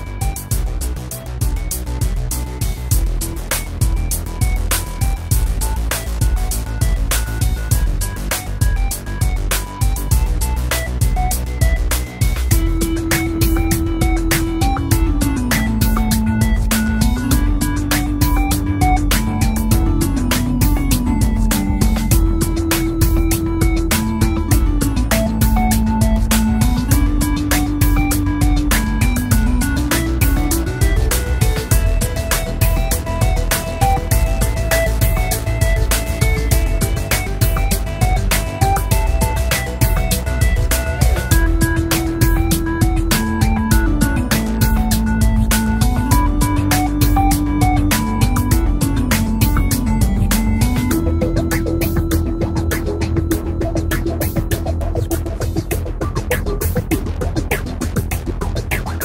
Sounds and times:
Music: 0:00.0 - 0:59.0.

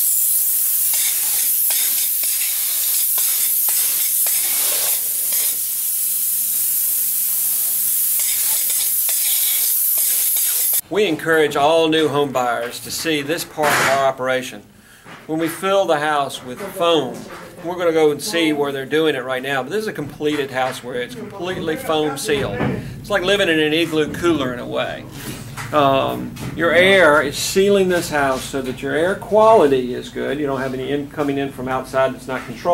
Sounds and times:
Spray: 0:00.0 - 0:10.8
Speech: 0:10.8 - 0:14.6, 0:15.3 - 0:25.1, 0:25.7 - 0:32.7.

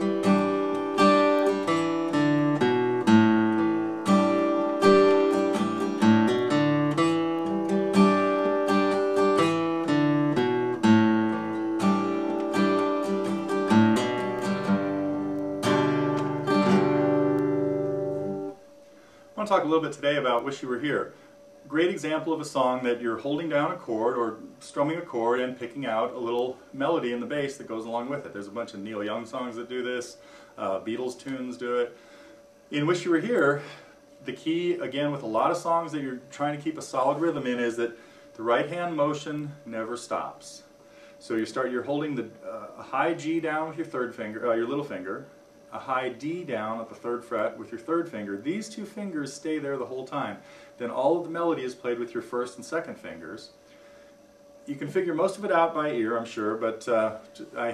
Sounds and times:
Acoustic guitar: 0:00.0 - 0:19.7
Strum: 0:00.0 - 0:24.4.

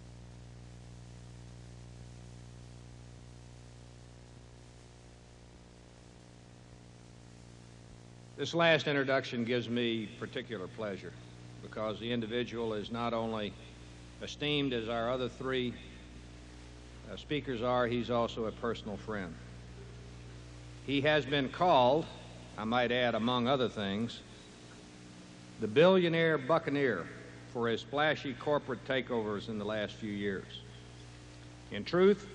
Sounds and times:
Narration, monologue: 0:05.4 - 0:32.3
Male speech, man speaking: 0:08.4 - 0:13.6, 0:14.2 - 0:16.0, 0:17.1 - 0:19.5, 0:20.9 - 0:24.3, 0:25.6 - 0:30.7, 0:31.7 - 0:32.3.

